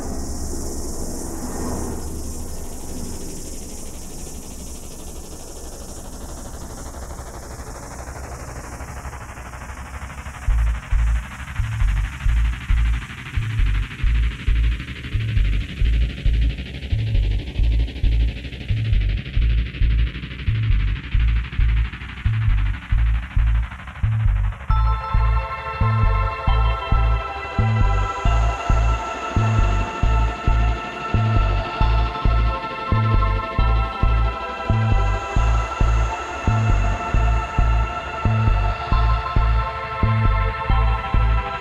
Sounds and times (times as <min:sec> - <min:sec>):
Music: 0:02.0 - 0:41.6.